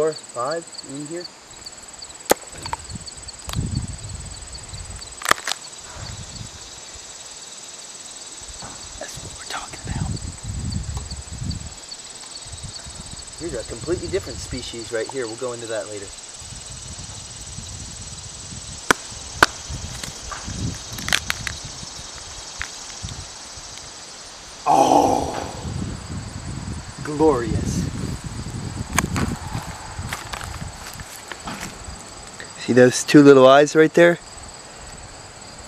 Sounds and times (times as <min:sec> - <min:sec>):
Outside, rural or natural: 0:00.0 - 0:35.6.